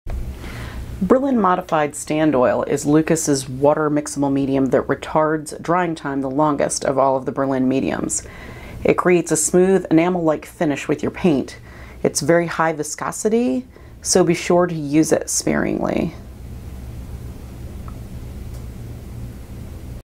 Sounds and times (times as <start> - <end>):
Speech: 1.0 - 8.2, 8.8 - 16.2.